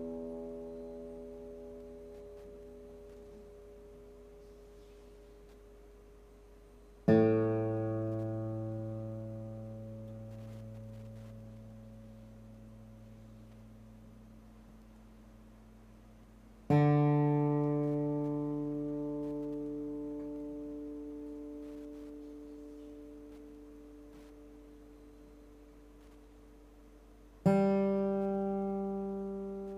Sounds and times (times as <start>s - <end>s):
Music: 0.0s - 14.0s, 16.7s - 26.5s, 27.4s - 29.7s.